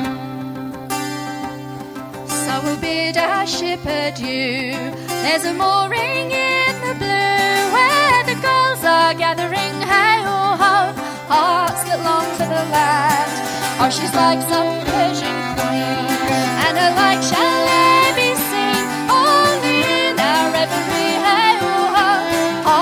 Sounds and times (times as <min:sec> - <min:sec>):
Music: 0:00.0 - 0:22.8
Singing: 0:02.4 - 0:22.8.